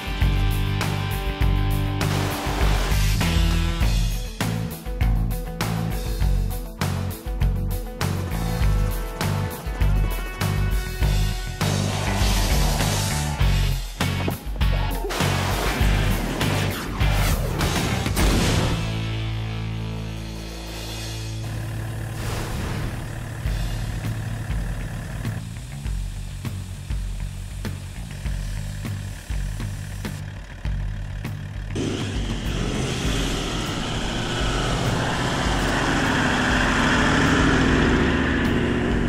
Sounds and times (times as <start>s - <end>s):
Music: 0.0s - 39.0s.